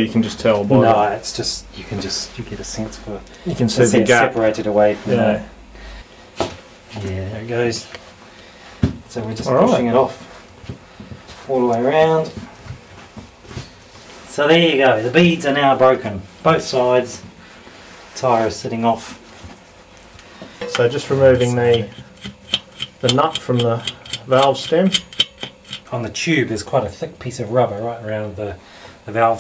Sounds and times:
Speech: 0.0s - 5.5s, 6.9s - 8.0s, 9.1s - 10.2s, 11.5s - 12.5s, 14.3s - 17.3s, 18.2s - 19.2s, 20.6s - 22.0s, 23.0s - 25.0s, 25.9s - 29.4s.

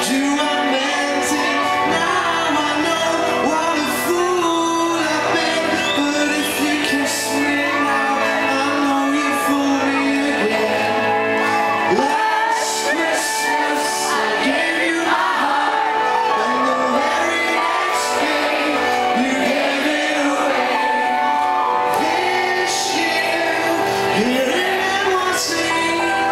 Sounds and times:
Male singing: 0.0s - 11.2s, 11.9s - 21.2s, 22.0s - 26.3s
Music: 0.0s - 26.3s.

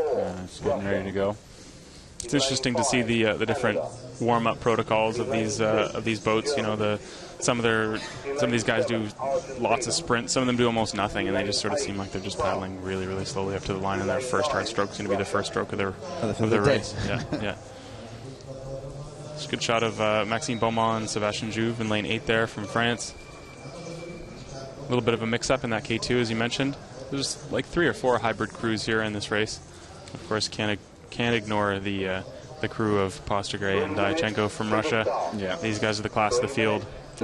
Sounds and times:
Speech: 0.0s - 1.4s, 2.2s - 37.2s.

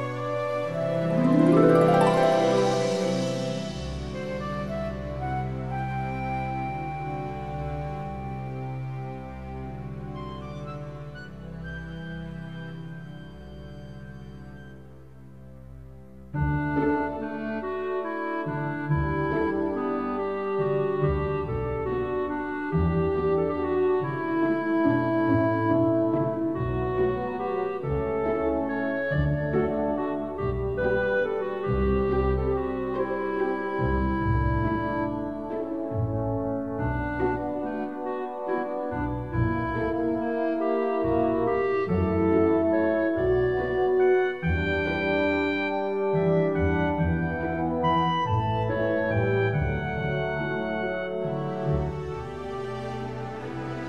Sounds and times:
Tender music: 0.0s - 53.8s
Theme music: 0.0s - 53.8s.

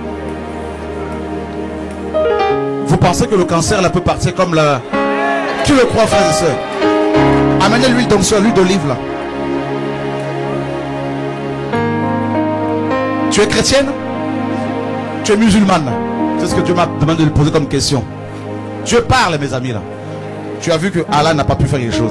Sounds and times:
Music: 0.0s - 22.1s
Speech: 2.9s - 4.8s, 5.6s - 6.6s, 7.6s - 9.0s, 13.3s - 14.0s, 15.3s - 18.1s, 18.9s - 19.8s, 20.6s - 22.1s.

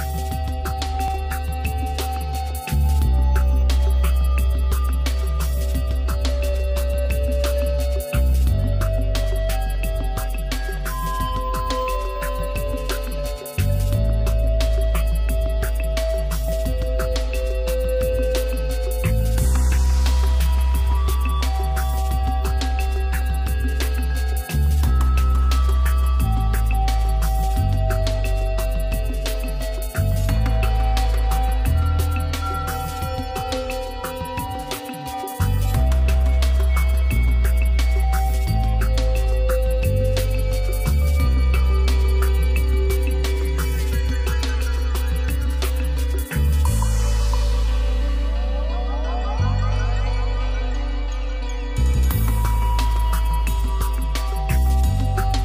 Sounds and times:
Music: 0.0s - 55.4s.

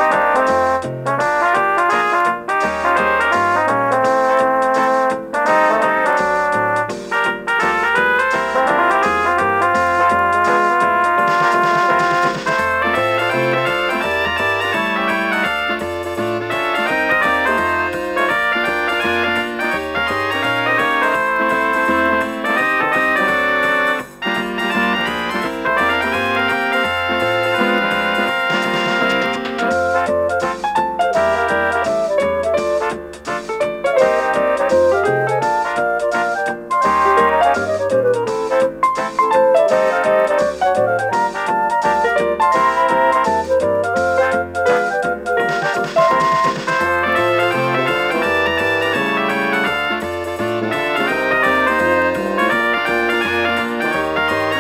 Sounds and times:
Funny music: 0.0s - 54.6s
Independent music: 0.0s - 54.6s.

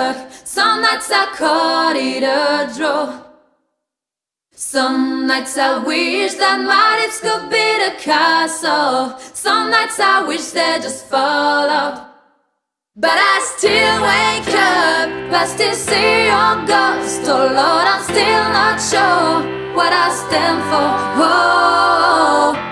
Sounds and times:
Singing: 0.0s - 3.4s, 4.6s - 12.3s, 13.0s - 22.7s.

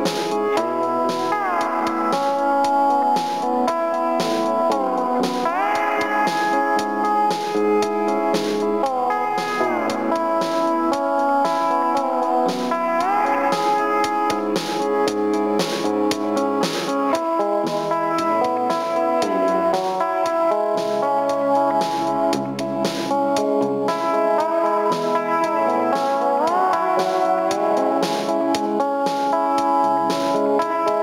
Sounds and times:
Electric guitar: 0.0s - 31.0s
Strum: 0.0s - 31.0s.

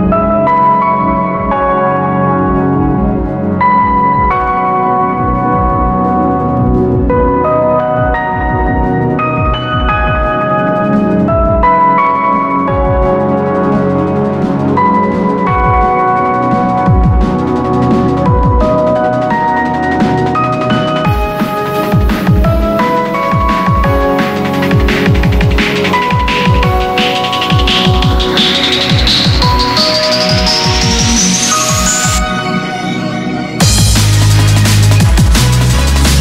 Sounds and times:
Music: 0.0s - 36.2s.

